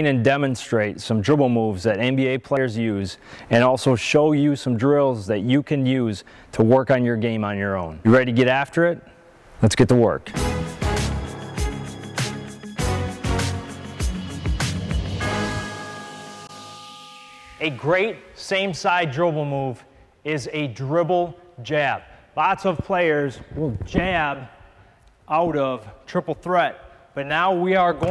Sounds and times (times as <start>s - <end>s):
Speech: 0.0s - 9.0s, 9.6s - 10.3s, 17.6s - 24.5s, 25.3s - 28.1s
Music: 10.3s - 17.8s.